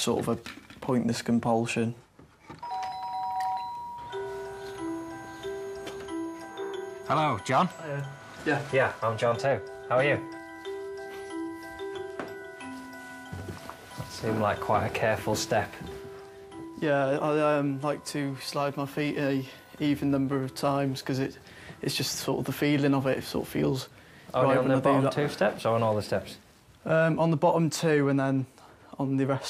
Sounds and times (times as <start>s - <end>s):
Doorbell: 2.6s - 16.8s
Music: 3.5s - 23.0s.